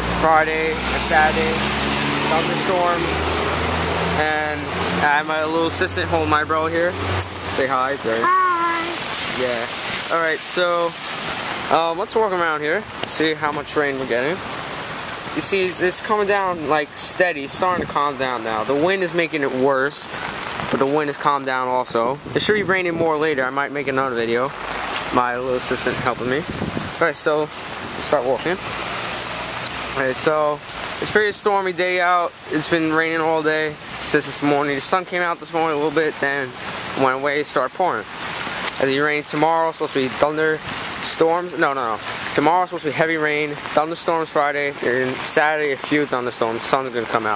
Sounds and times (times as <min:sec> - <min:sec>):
Rain on surface: 0:00.0 - 0:47.3.